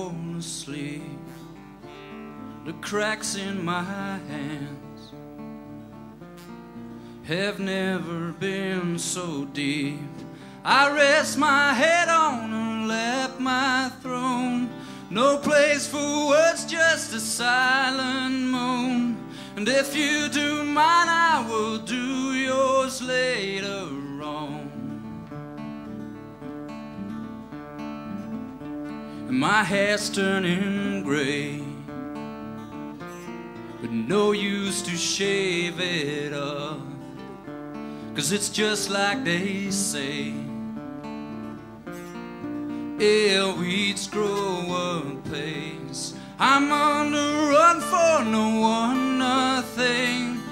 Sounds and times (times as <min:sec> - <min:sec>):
Music: 0:00.0 - 0:50.5.